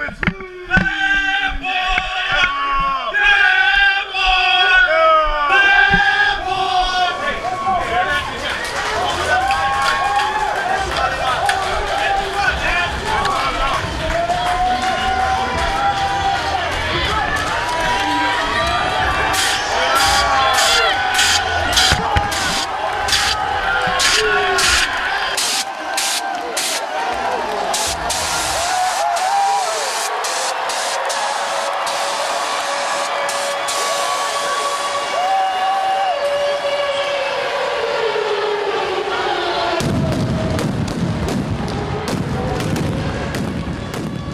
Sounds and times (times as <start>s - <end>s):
Speech: 0.0s - 9.5s.